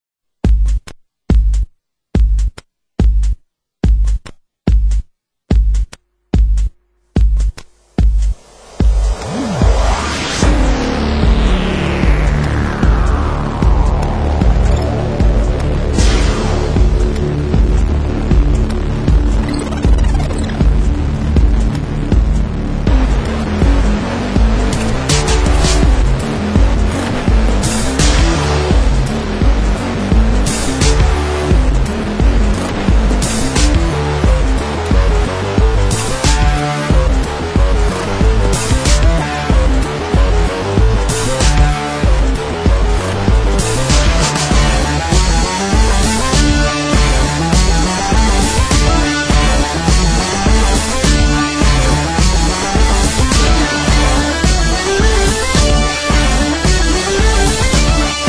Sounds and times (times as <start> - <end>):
Drum machine: 0.4 - 58.2.